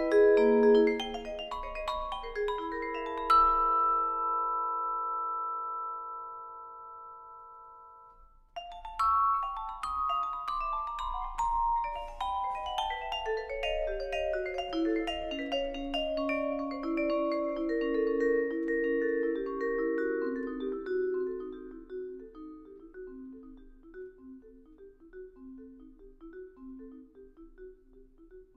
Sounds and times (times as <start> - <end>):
Glockenspiel: 0.0 - 28.5
Marimba, xylophone: 0.0 - 28.5.